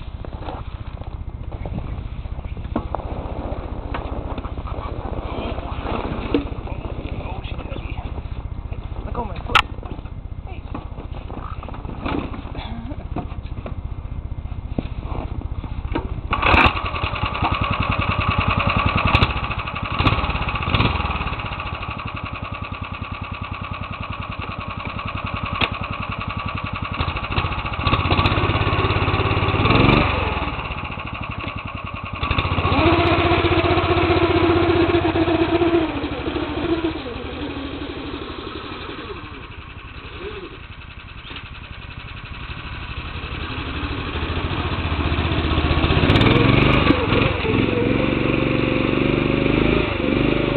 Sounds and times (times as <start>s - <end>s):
Outside, rural or natural: 0.0s - 50.5s
Vehicle: 0.0s - 50.5s.